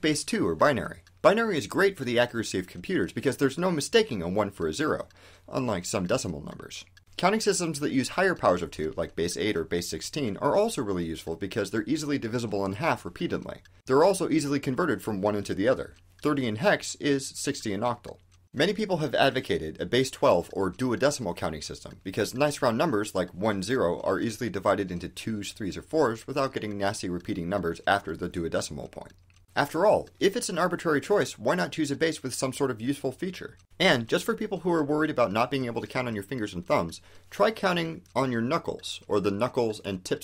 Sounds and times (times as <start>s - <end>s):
Speech: 0.0s - 40.2s.